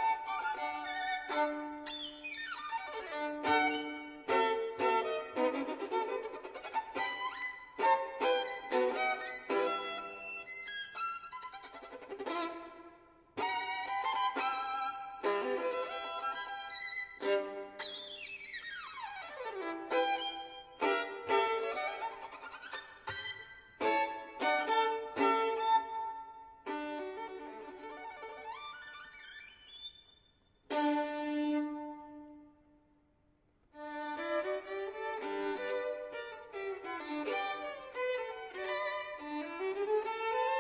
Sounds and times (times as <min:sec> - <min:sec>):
Violin, fiddle: 0:00.0 - 0:32.6, 0:33.7 - 0:40.6.